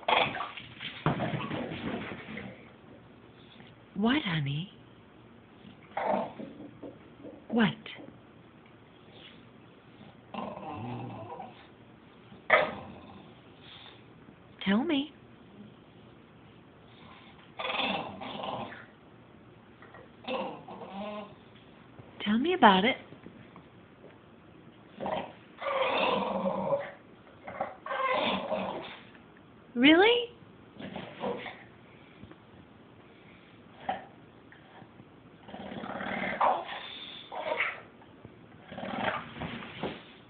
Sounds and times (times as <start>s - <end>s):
Speech: 4.0s - 4.8s, 14.6s - 15.2s, 22.2s - 23.1s, 29.8s - 30.4s
Animal: 25.1s - 29.0s.